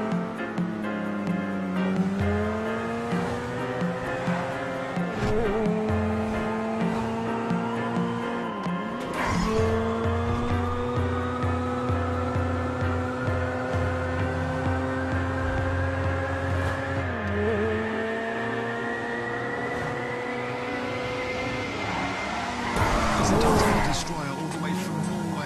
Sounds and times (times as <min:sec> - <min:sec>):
Race car, auto racing: 0:00.0 - 0:25.4.